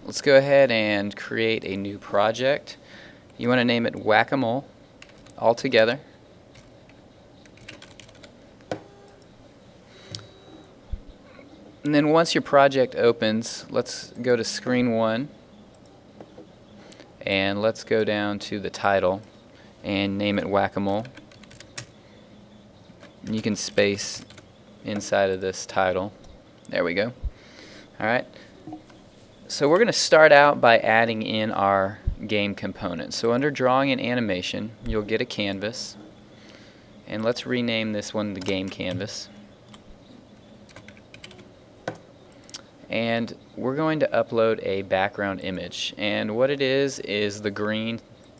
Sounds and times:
Speech: 0.0 - 2.8, 3.4 - 4.7, 5.4 - 6.1, 11.9 - 15.3, 17.2 - 21.2, 23.2 - 27.2, 28.0 - 28.3, 29.5 - 36.0, 37.1 - 39.4, 42.9 - 48.0.

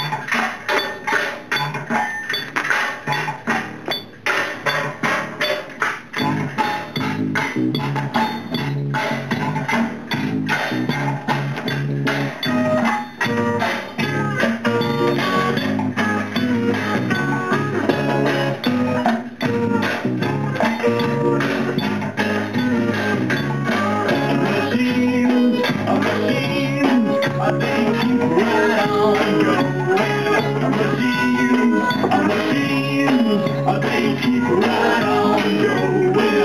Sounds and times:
Psychedelic rock: 3.0 - 36.4.

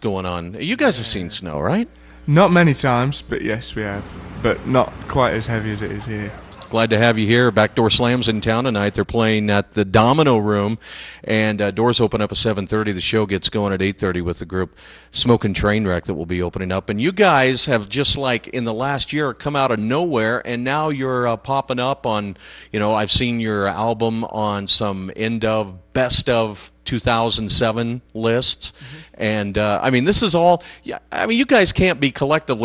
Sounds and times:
Speech: 0.0 - 32.6.

